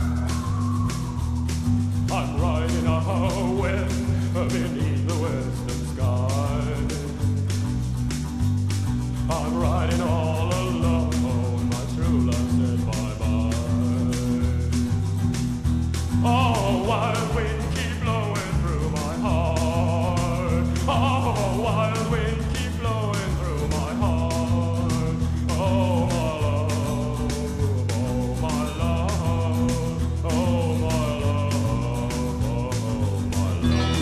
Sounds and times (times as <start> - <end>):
Music: 0.0 - 34.0.